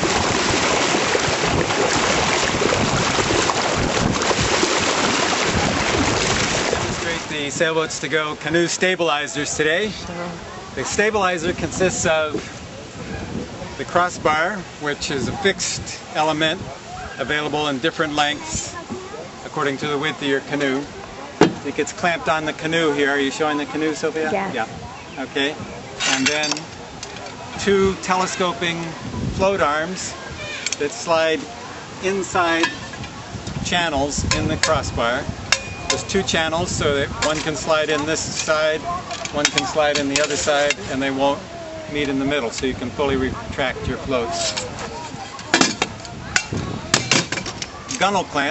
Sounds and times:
Speech: 21.6 - 26.6, 33.6 - 35.3, 36.0 - 45.7.

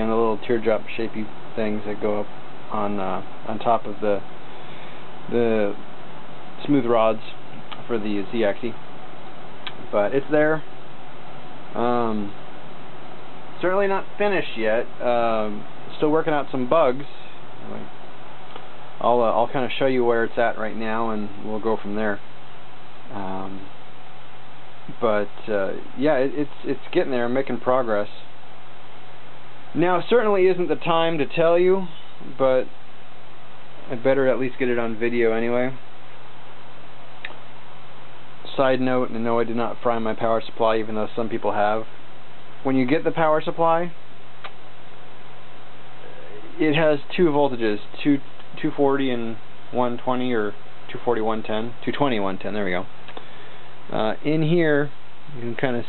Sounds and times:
Speech: 0.0 - 4.3, 5.3 - 5.8, 6.6 - 8.8, 9.7 - 10.7, 11.8 - 12.4, 13.6 - 17.9, 19.0 - 22.2, 23.1 - 23.7, 24.9 - 28.3, 29.7 - 32.7, 33.8 - 35.8, 38.4 - 41.9, 42.6 - 44.0, 46.1 - 52.9, 53.9 - 55.8.

